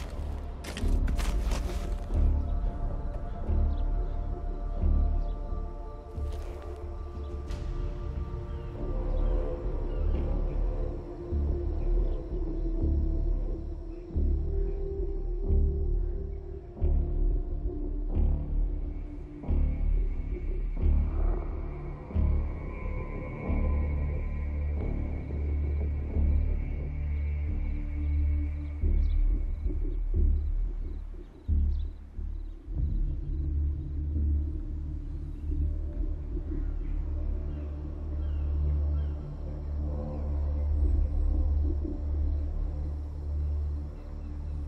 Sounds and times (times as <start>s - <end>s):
Music: 0.0s - 44.6s
Outside, urban or manmade: 0.0s - 44.6s
Rumble: 0.0s - 44.6s.